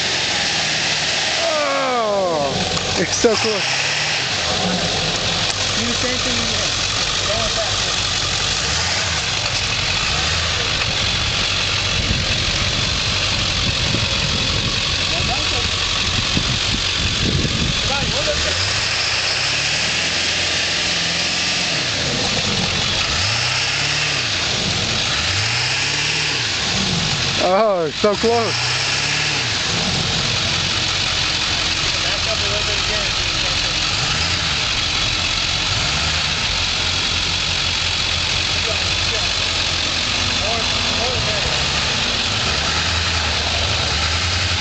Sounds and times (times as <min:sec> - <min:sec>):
Tire squeal: 0:00.0 - 0:44.6
Truck: 0:00.0 - 0:44.6
Speech: 0:05.8 - 0:08.0, 0:15.1 - 0:15.8, 0:17.8 - 0:18.6, 0:27.4 - 0:28.6, 0:32.0 - 0:33.9, 0:38.6 - 0:39.4, 0:40.4 - 0:41.6.